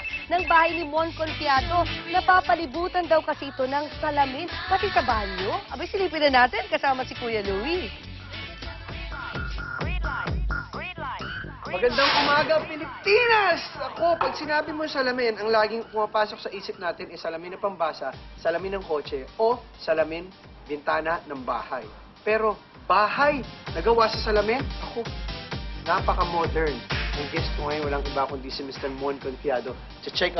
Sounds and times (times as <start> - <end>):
Music: 0.0 - 30.3.